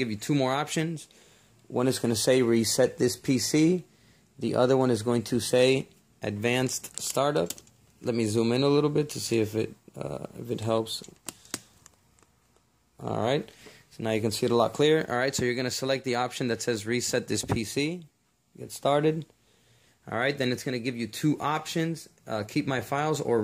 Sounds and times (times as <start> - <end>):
Speech: 0.0 - 1.1, 1.7 - 11.1, 13.0 - 19.3, 20.1 - 23.4.